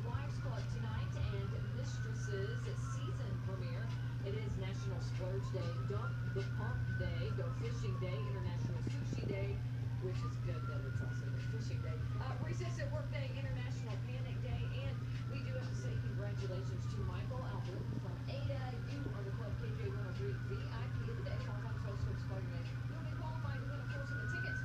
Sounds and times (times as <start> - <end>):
Speech: 0.0 - 24.6.